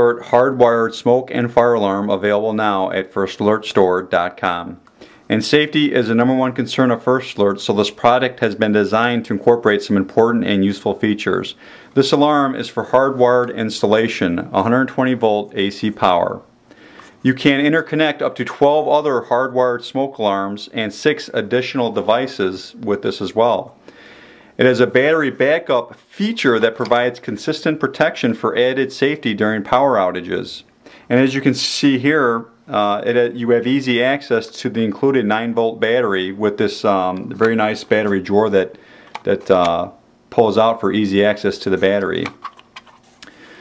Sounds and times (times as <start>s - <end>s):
Speech: 0.0s - 16.5s, 17.2s - 23.8s, 24.6s - 42.4s.